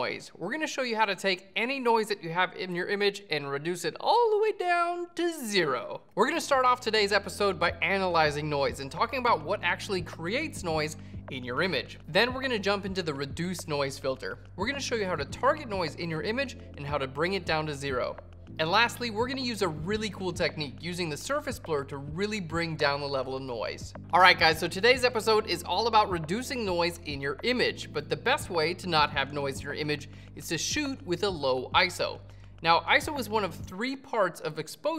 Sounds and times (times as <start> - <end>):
Speech: 0.0 - 34.9.